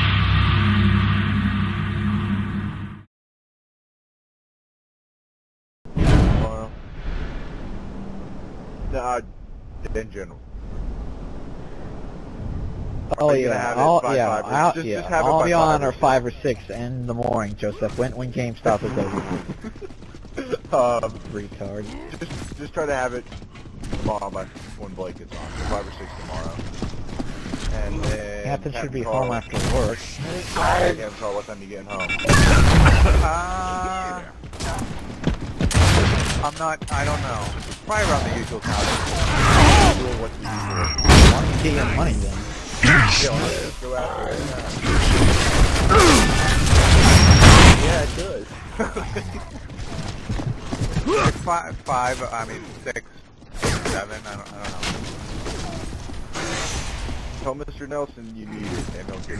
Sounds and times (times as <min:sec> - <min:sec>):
Speech: 0:13.2 - 0:19.4, 0:24.0 - 0:26.6, 0:27.7 - 0:32.3, 0:36.4 - 0:45.0, 0:51.1 - 0:53.0, 0:53.7 - 0:54.9, 0:57.4 - 0:59.3.